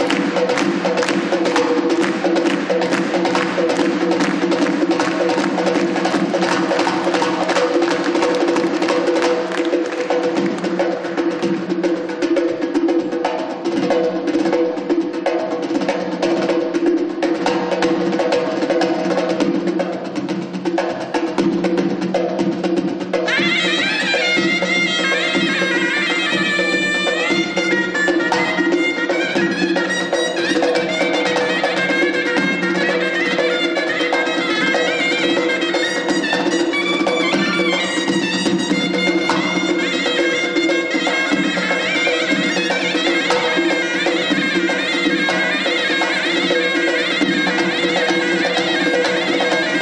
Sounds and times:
Traditional music: 0.0 - 49.8.

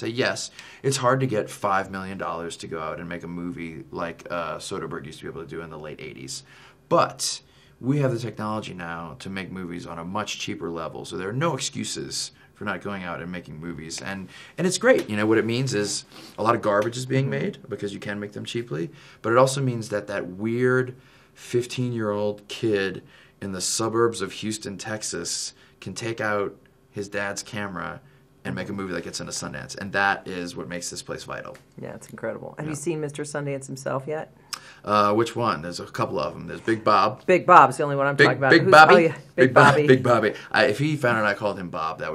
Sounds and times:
Speech: 0.0 - 42.1.

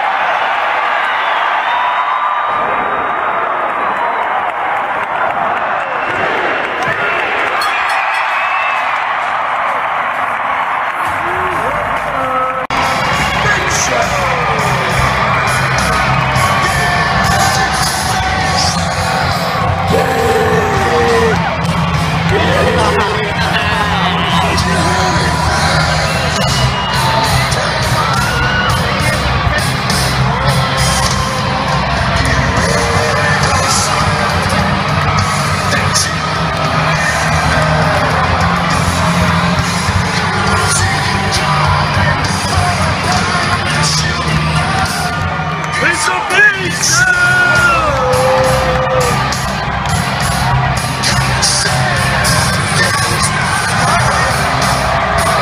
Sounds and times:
Inside, large room or hall: 0.0 - 55.4
Speech: 11.3 - 14.7, 22.3 - 25.6, 45.8 - 48.6, 51.0 - 54.5
Music: 12.7 - 55.4.

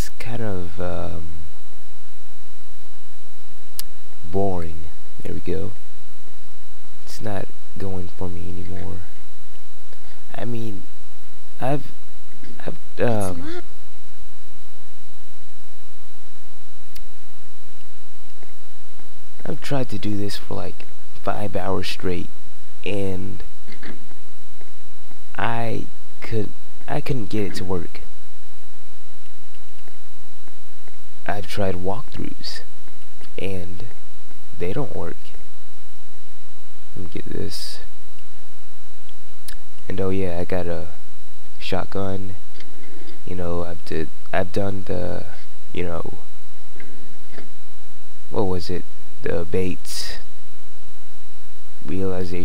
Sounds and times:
Speech: 0.0 - 1.3, 4.3 - 5.8, 7.1 - 9.2, 10.3 - 10.8, 11.6 - 11.9, 12.5 - 13.6, 19.4 - 23.9, 25.3 - 28.1, 31.2 - 32.7, 33.4 - 33.9, 34.6 - 35.4, 37.0 - 37.9, 39.9 - 41.0, 41.6 - 42.4, 43.3 - 46.3, 48.3 - 50.3, 51.9 - 52.4.

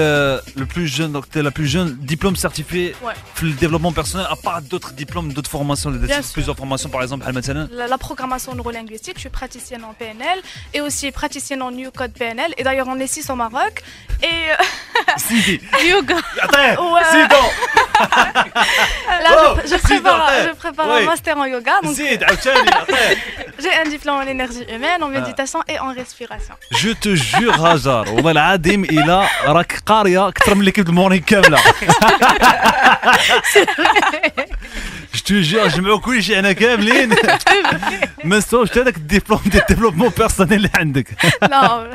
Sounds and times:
Speech: 0.0 - 14.6, 15.2 - 17.6, 19.1 - 32.0, 35.1 - 41.9
Music: 0.0 - 41.9.

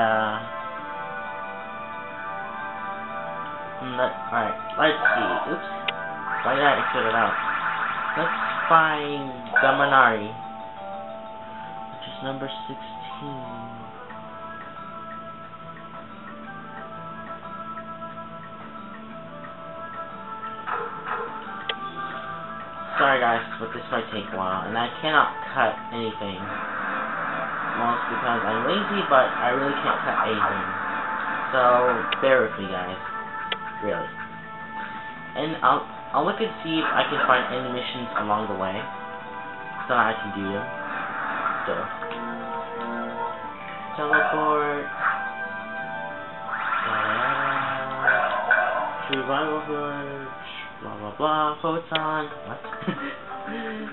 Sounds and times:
Speech: 0.0 - 0.5, 3.8 - 5.7, 6.4 - 7.4, 8.2 - 10.4, 12.0 - 13.8, 22.9 - 26.5, 27.8 - 30.8, 31.6 - 33.1, 33.8 - 34.1, 35.4 - 38.9, 39.9 - 40.7, 41.7 - 41.9, 44.0 - 44.9, 46.9 - 48.1, 49.1 - 52.7
Music: 0.0 - 53.9.

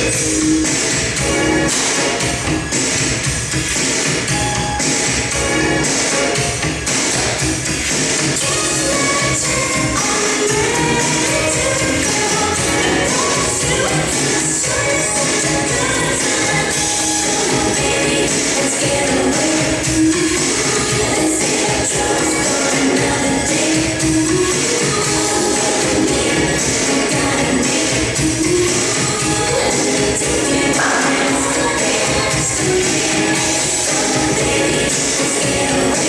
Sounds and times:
Rhythm and blues: 0.0 - 36.0.

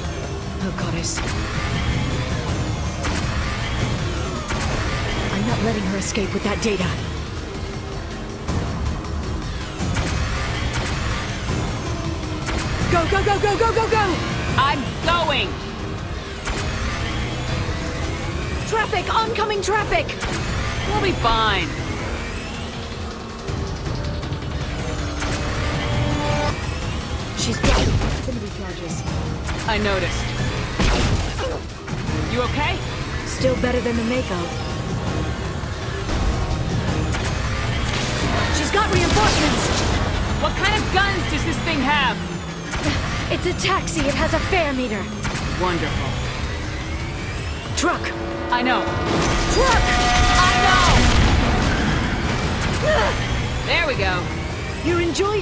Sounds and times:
Music: 0.0 - 55.4.

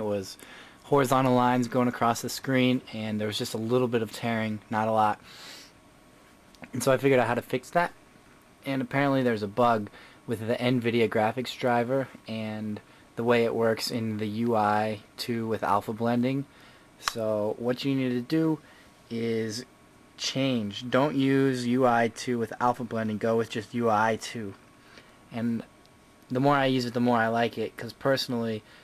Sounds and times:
Speech: 0.0 - 5.2, 6.6 - 8.0, 8.6 - 24.6, 25.3 - 25.7, 26.3 - 28.7.

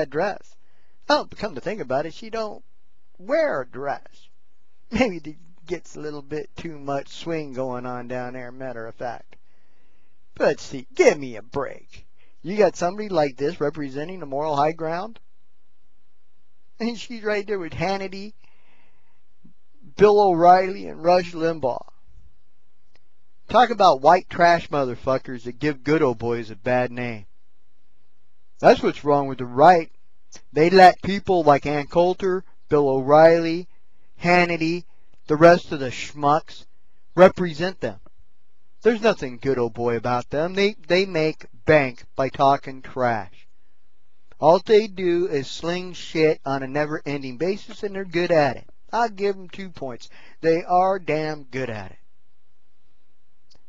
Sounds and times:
Speech: 0.0 - 0.5, 1.1 - 2.6, 3.2 - 4.2, 4.9 - 9.3, 10.4 - 15.2, 16.8 - 18.3, 19.9 - 21.9, 23.5 - 27.3, 28.6 - 38.0, 38.8 - 43.3, 44.4 - 52.0.

